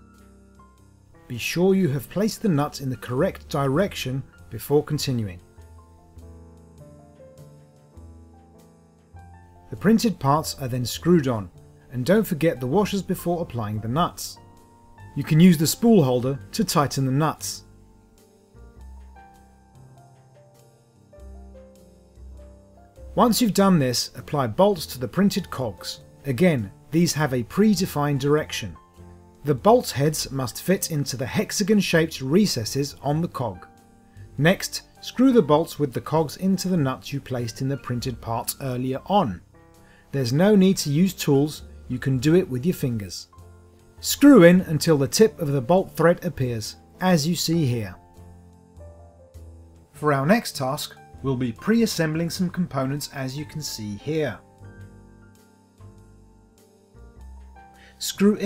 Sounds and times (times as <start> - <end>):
Music: 0.0 - 58.4
Speech: 1.3 - 5.4, 9.7 - 14.4, 15.2 - 17.6, 23.2 - 28.8, 29.4 - 33.7, 34.4 - 39.4, 40.1 - 43.3, 44.0 - 48.0, 50.0 - 54.4, 58.0 - 58.4.